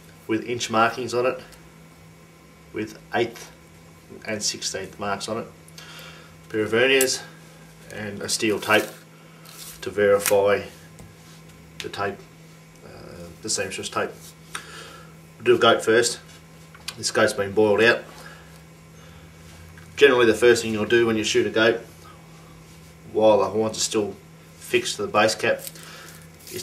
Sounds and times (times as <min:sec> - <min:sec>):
Speech: 0:00.3 - 0:01.5, 0:02.7 - 0:05.6, 0:06.5 - 0:07.3, 0:07.9 - 0:09.0, 0:09.8 - 0:10.8, 0:11.8 - 0:14.2, 0:15.4 - 0:16.3, 0:16.9 - 0:18.1, 0:20.0 - 0:21.9, 0:23.1 - 0:25.7.